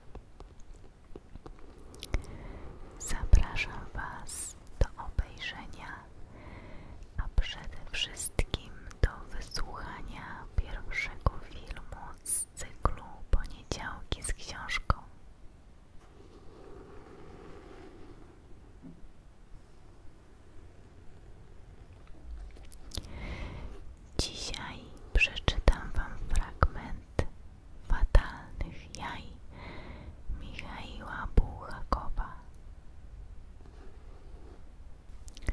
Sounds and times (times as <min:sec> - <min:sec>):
Whispering: 0:01.4 - 0:06.3, 0:07.0 - 0:15.2, 0:22.8 - 0:29.5, 0:30.3 - 0:32.6.